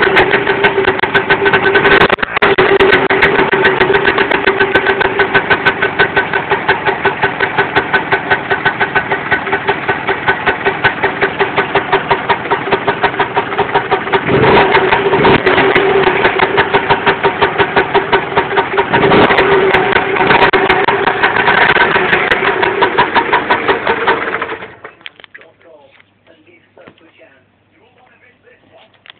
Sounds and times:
Engine: 0.0 - 25.4
Speech: 25.4 - 29.0.

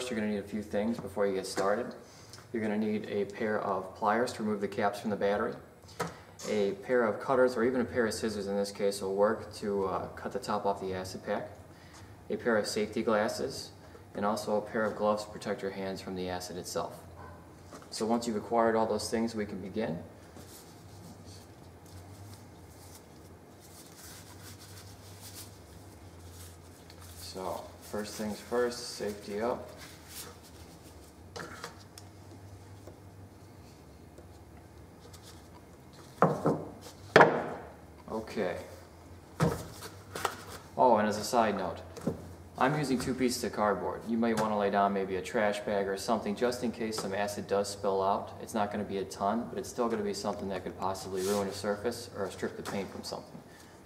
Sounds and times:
Speech: 0.0 - 5.7, 6.4 - 11.6, 12.3 - 17.1, 17.9 - 20.1, 27.2 - 29.8, 38.1 - 38.8, 40.8 - 41.9, 42.6 - 53.4.

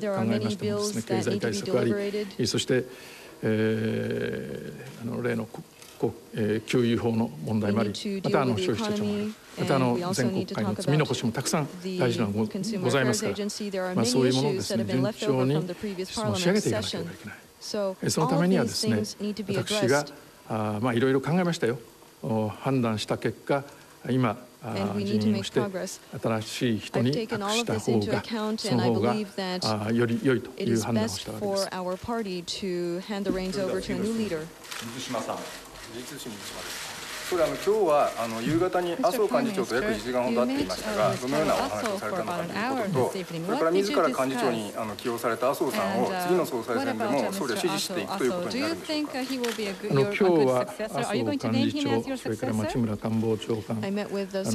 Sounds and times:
Female speech, woman speaking: 0.0 - 2.4, 7.6 - 20.1, 24.8 - 26.0, 27.0 - 29.8, 30.6 - 34.5, 39.0 - 44.8, 45.7 - 52.9, 53.8 - 54.5
Male speech, man speaking: 0.0 - 17.4, 18.0 - 31.7, 33.3 - 54.5
Narration, monologue: 0.0 - 54.5.

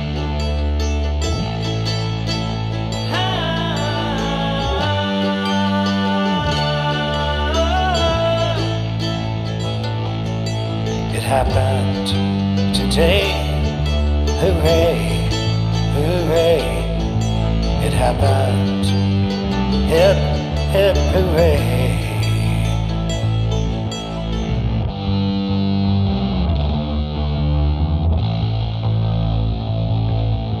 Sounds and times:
Music: 0.0 - 30.6.

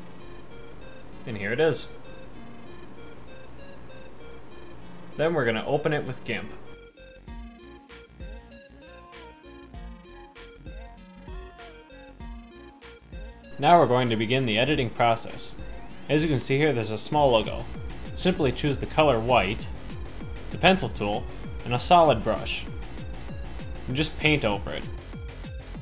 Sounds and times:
Music: 0.0 - 25.8
Speech: 1.3 - 1.9, 5.2 - 6.6, 13.6 - 17.6, 18.2 - 19.7, 20.6 - 22.7, 23.9 - 24.9.

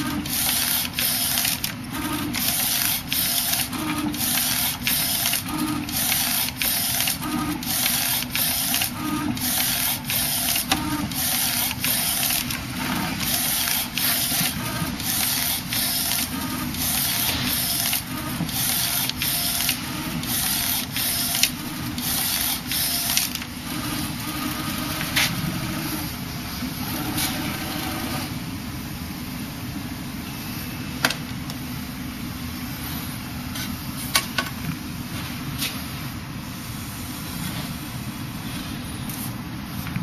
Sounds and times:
Printer: 0.0 - 40.0.

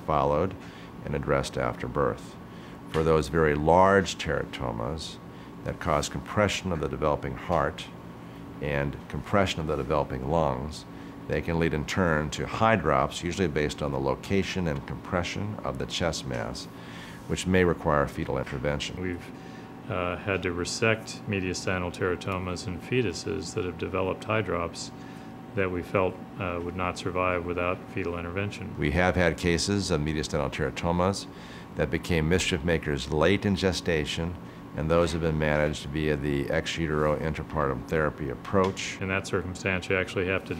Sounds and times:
Speech: 0.0 - 8.0, 8.6 - 16.7, 17.3 - 40.5.

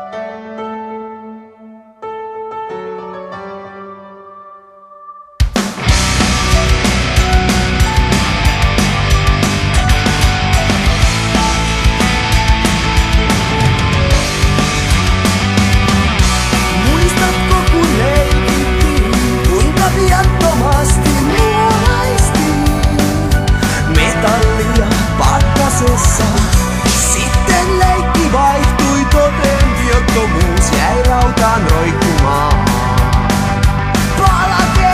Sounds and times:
Music: 0.0 - 34.9.

